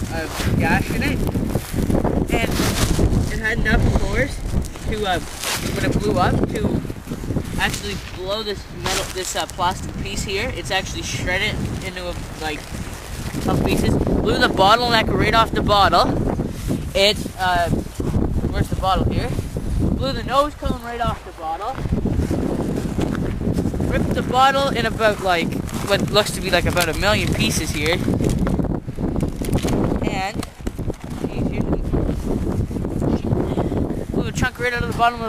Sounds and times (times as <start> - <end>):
Speech: 0.1 - 1.2, 3.3 - 5.2, 7.6 - 12.6, 13.5 - 16.1, 17.0 - 17.8, 18.5 - 19.4, 20.0 - 21.8, 23.9 - 28.0, 30.0 - 30.4, 34.2 - 35.2.